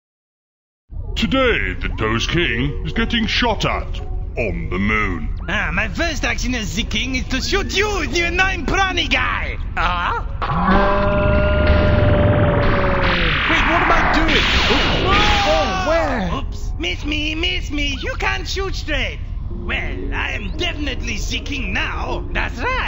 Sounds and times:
Music: 0:00.9 - 0:10.4, 0:11.0 - 0:22.8
Speech: 0:01.2 - 0:10.3, 0:13.5 - 0:22.8.

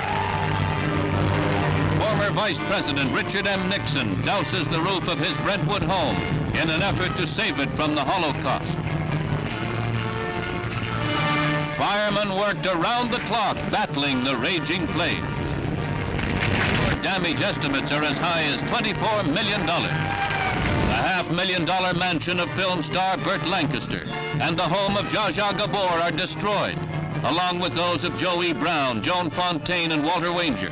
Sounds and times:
Music: 0:00.0 - 0:30.7
Speech: 0:02.0 - 0:08.8, 0:11.8 - 0:15.2, 0:17.0 - 0:20.0, 0:20.9 - 0:30.7.

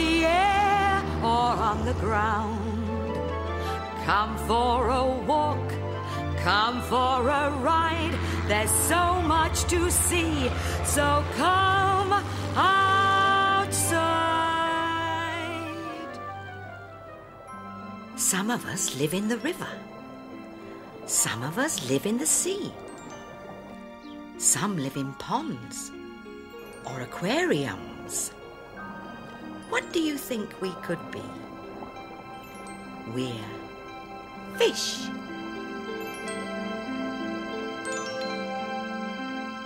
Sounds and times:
Music: 0:00.0 - 0:39.6
Speech: 0:21.1 - 0:22.8, 0:29.7 - 0:31.4, 0:33.1 - 0:33.6, 0:34.5 - 0:35.1.

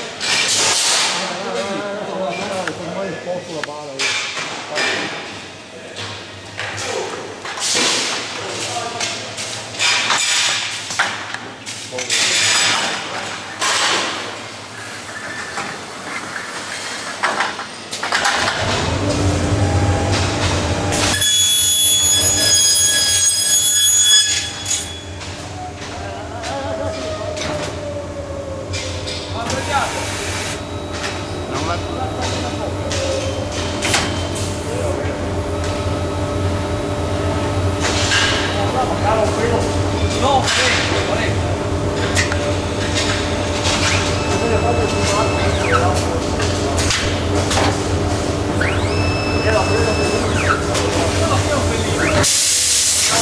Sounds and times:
Speech: 0:01.2 - 0:06.1, 0:08.4 - 0:09.4, 0:11.9 - 0:13.2, 0:25.9 - 0:27.4, 0:29.4 - 0:30.2, 0:31.4 - 0:33.2, 0:38.5 - 0:41.5, 0:44.3 - 0:46.9, 0:49.4 - 0:52.2.

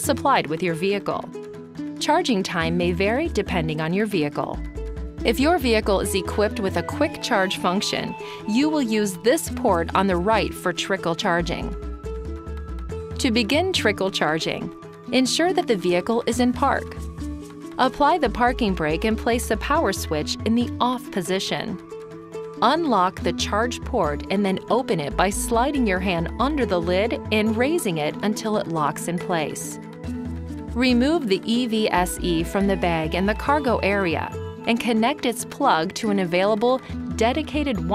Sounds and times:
Speech: 0:00.0 - 0:01.3, 0:02.0 - 0:04.6, 0:05.3 - 0:11.8, 0:13.2 - 0:17.0, 0:17.8 - 0:21.8, 0:22.6 - 0:29.8, 0:30.8 - 0:37.9
Music: 0:00.0 - 0:37.9.

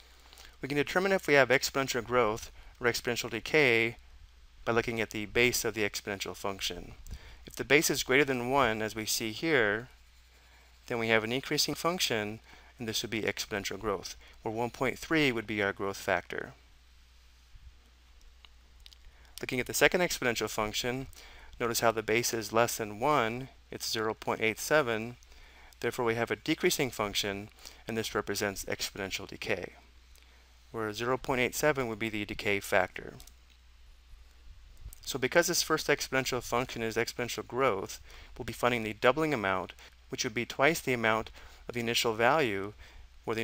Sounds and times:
Speech: 0:00.6 - 0:04.0, 0:04.6 - 0:09.9, 0:10.9 - 0:16.6, 0:19.4 - 0:25.2, 0:25.8 - 0:29.8, 0:30.8 - 0:33.3, 0:35.0 - 0:43.4.

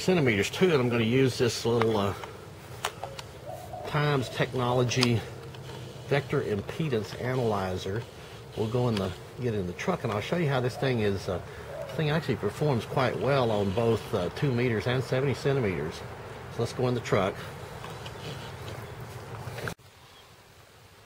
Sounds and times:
Speech: 0:00.0 - 0:02.3, 0:03.8 - 0:05.4, 0:06.0 - 0:17.5.

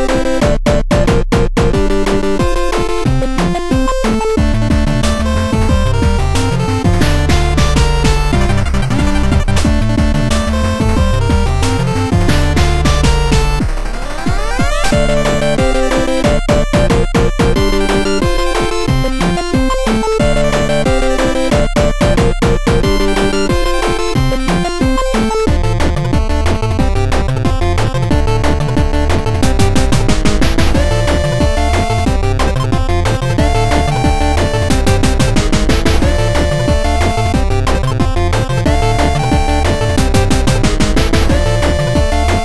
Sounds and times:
Exciting music: 0:00.0 - 0:42.4
Rhythm and blues: 0:00.0 - 0:42.4.

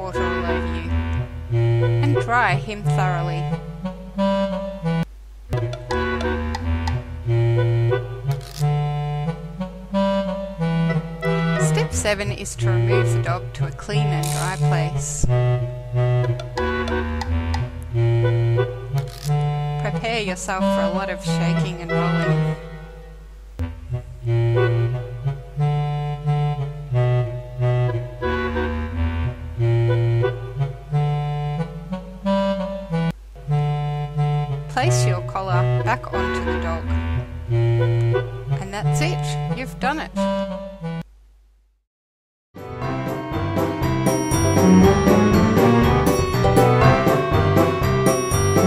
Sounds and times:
Speech: 0:00.0 - 0:00.9, 0:02.0 - 0:03.5, 0:11.6 - 0:15.3, 0:19.8 - 0:22.4, 0:34.7 - 0:36.9, 0:38.6 - 0:40.2
Wind instrument, woodwind instrument: 0:00.0 - 0:02.6, 0:03.2 - 0:12.0, 0:14.2 - 0:39.6, 0:42.6 - 0:48.6.

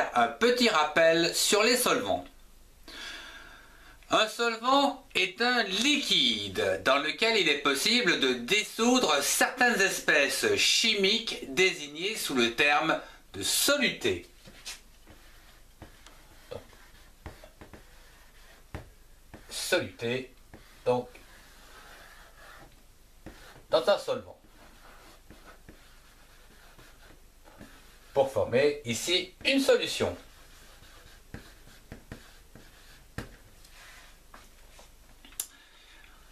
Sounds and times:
Speech: 0:00.0 - 0:02.3, 0:04.1 - 0:14.3, 0:19.5 - 0:21.2, 0:23.7 - 0:24.4, 0:28.2 - 0:30.3.

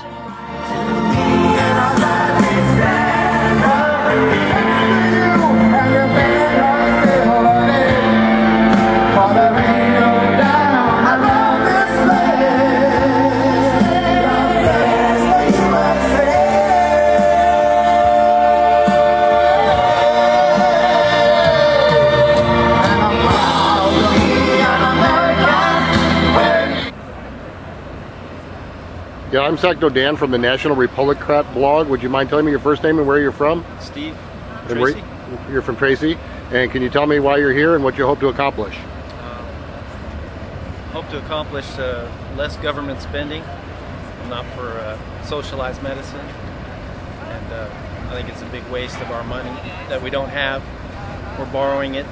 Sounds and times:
Male singing: 0:00.0 - 0:26.9
Music: 0:00.0 - 0:26.9.

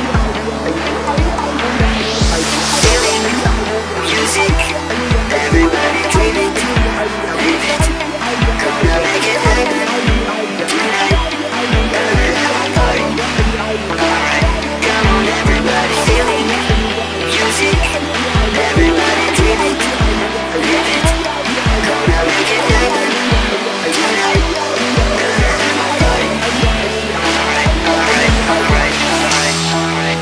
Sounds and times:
Music: 0:00.0 - 0:30.2.

